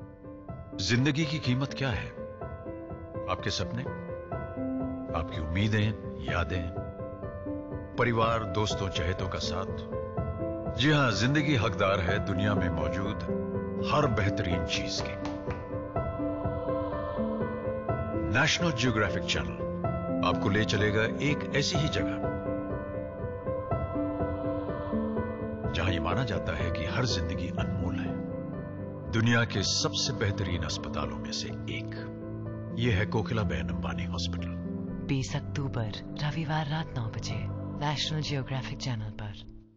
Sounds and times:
Music: 0.0s - 39.7s
Speech: 0.8s - 2.2s, 3.3s - 3.9s, 5.1s - 6.8s, 8.0s - 9.8s, 10.8s - 15.3s, 18.3s - 19.6s, 20.2s - 22.2s, 25.8s - 28.2s, 29.1s - 32.1s, 32.7s - 39.4s.

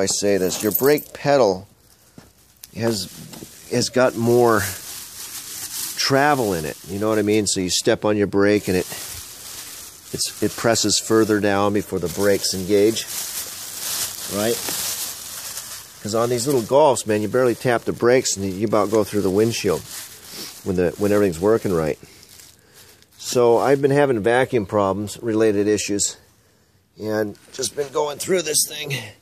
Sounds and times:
Speech: 0.0s - 1.7s, 2.7s - 4.8s, 6.0s - 9.0s, 10.1s - 13.1s, 14.3s - 14.7s, 16.0s - 19.9s, 20.6s - 22.0s, 23.2s - 26.2s, 27.0s - 29.2s.

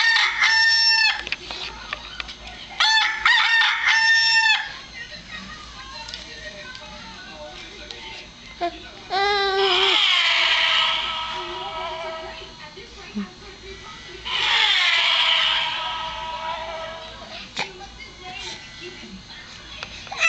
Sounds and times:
Speech: 4.7s - 9.9s, 11.4s - 14.3s, 17.0s - 20.2s.

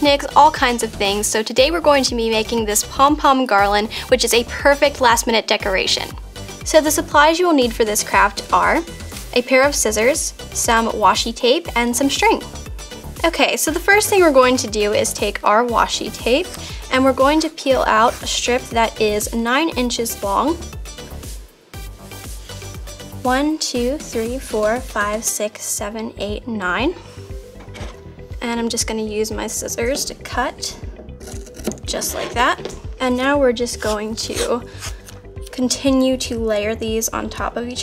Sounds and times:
Speech: 0.0s - 12.5s, 13.2s - 20.6s, 23.2s - 27.0s, 28.4s - 30.8s, 31.9s - 34.6s, 35.5s - 37.8s
Music: 0.0s - 37.8s.

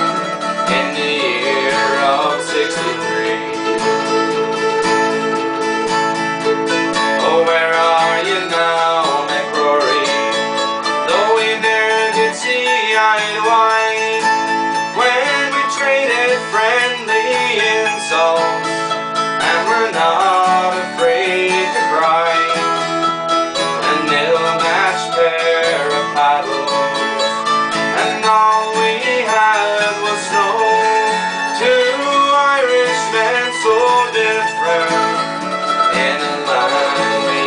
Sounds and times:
Bluegrass: 0.0s - 37.4s
Mandolin: 0.0s - 37.4s
Singing: 0.7s - 3.6s, 23.8s - 26.8s, 35.9s - 37.4s.

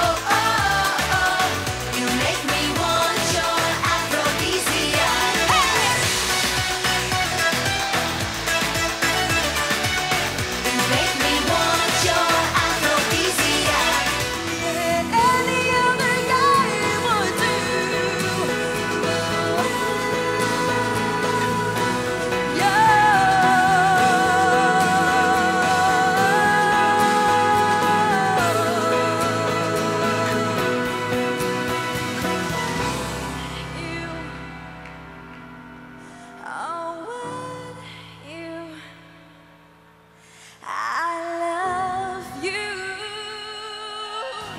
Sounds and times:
Singing: 0.0s - 7.2s, 9.0s - 32.8s
Music of Asia: 0.0s - 33.4s.

